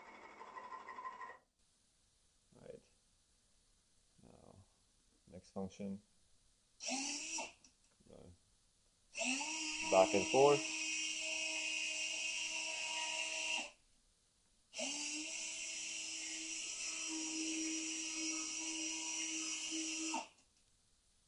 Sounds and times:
Inside, small room: 0:00.0 - 0:21.2
Speech: 0:05.3 - 0:06.0, 0:09.9 - 0:10.6.

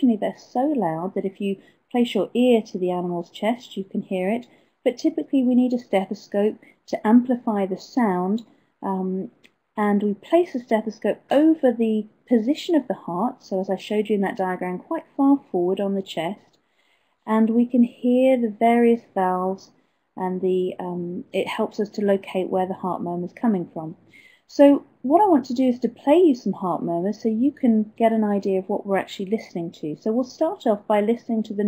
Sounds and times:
Speech: 0:00.0 - 0:16.5, 0:17.3 - 0:31.6.

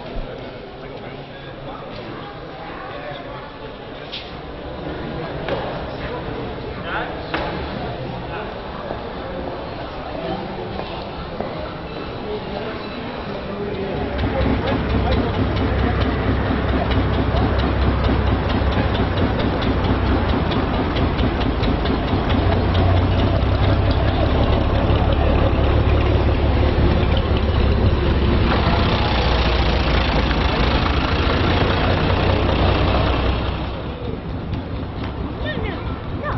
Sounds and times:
Speech: 0:00.0 - 0:16.9, 0:35.4 - 0:36.3.

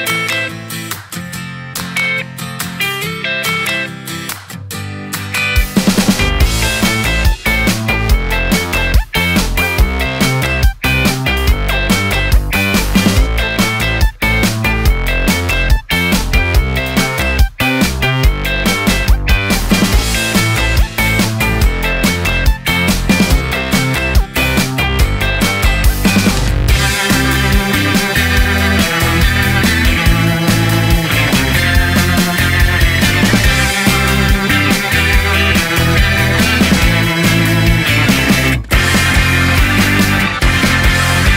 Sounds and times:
Music: 0:00.0 - 0:41.3.

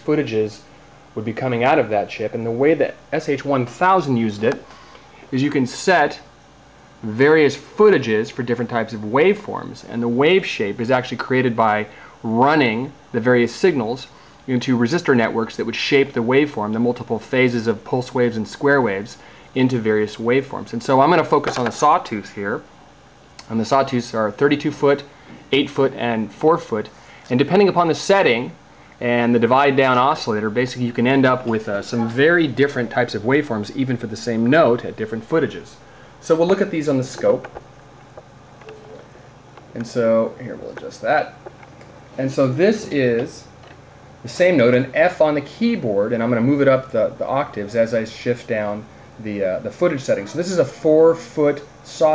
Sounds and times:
Speech: 0:00.0 - 0:04.7, 0:05.3 - 0:06.3, 0:07.0 - 0:22.7, 0:23.4 - 0:37.6, 0:39.7 - 0:41.5, 0:42.2 - 0:43.6, 0:44.2 - 0:52.1.

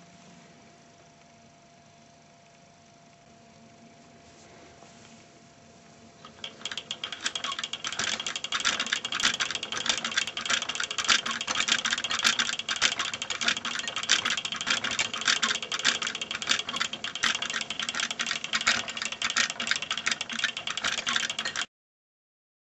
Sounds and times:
Inside, small room: 0:00.0 - 0:21.7.

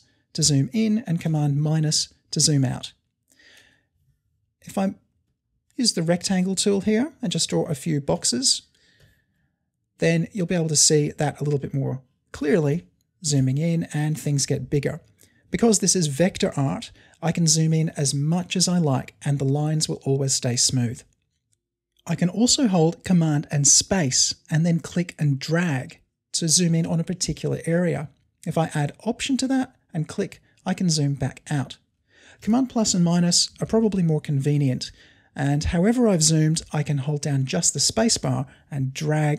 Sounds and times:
Speech: 0:00.0 - 0:03.0, 0:04.6 - 0:05.0, 0:05.8 - 0:08.7, 0:10.0 - 0:15.0, 0:15.6 - 0:21.1, 0:22.0 - 0:31.8, 0:32.4 - 0:39.3.

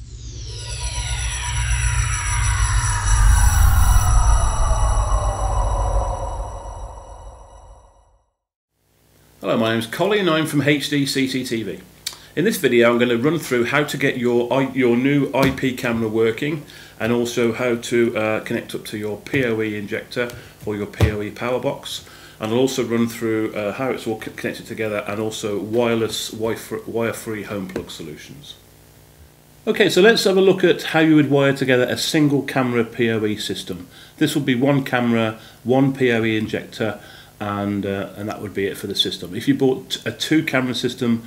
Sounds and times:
Speech: 0:09.4 - 0:28.6, 0:29.7 - 0:41.2.

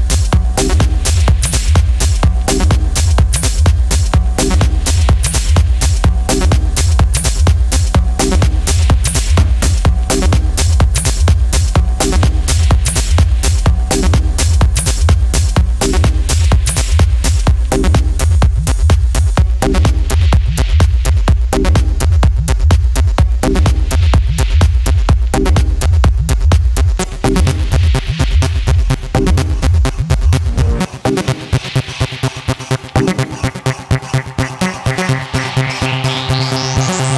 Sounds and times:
Electronica: 0:00.0 - 0:37.1
Trance music: 0:00.0 - 0:37.1.

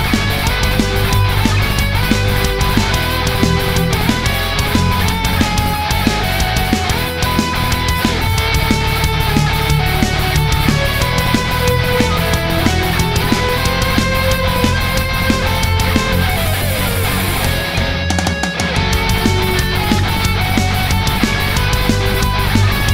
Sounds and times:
Electric guitar: 0:00.0 - 0:22.9
Strum: 0:00.0 - 0:22.9.

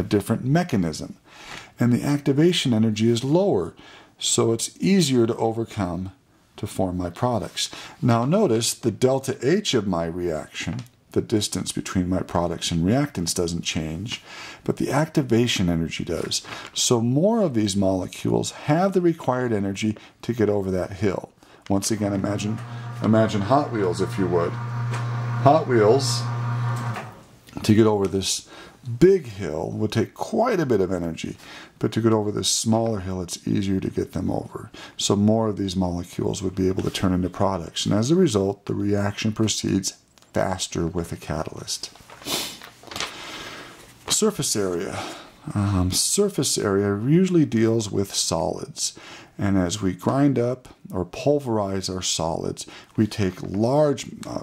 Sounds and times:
Speech: 0:00.0 - 0:01.2, 0:01.8 - 0:24.6, 0:25.4 - 0:26.3, 0:27.5 - 0:42.0, 0:44.1 - 0:54.4.

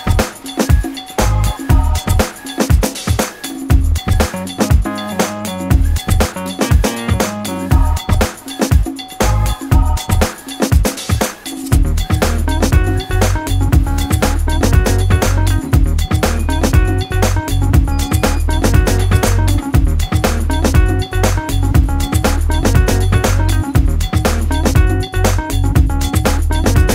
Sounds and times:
Music: 0:00.0 - 0:26.9.

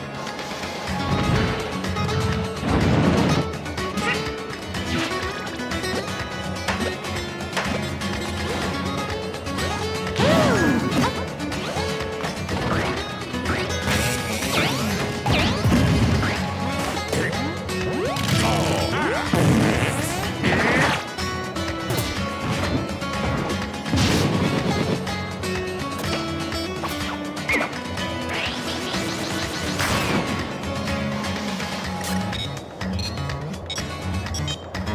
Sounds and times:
Music: 0:00.0 - 0:34.9.

